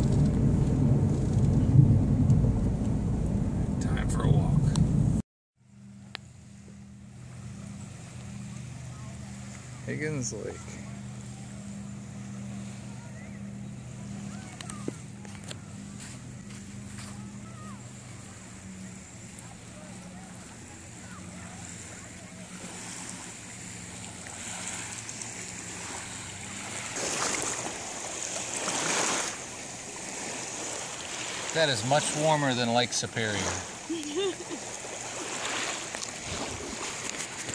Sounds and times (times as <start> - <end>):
Splash, splatter: 21.4 - 32.4, 34.5 - 37.5
Speech: 31.6 - 33.5.